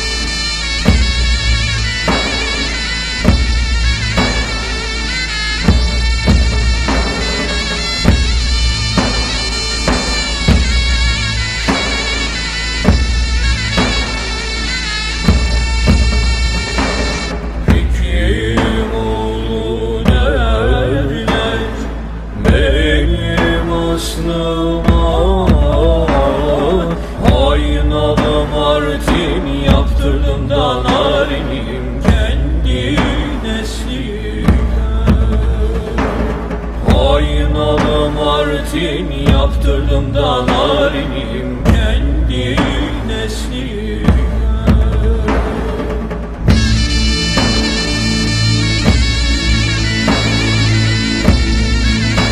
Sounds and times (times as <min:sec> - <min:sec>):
Music: 0:00.0 - 0:52.3.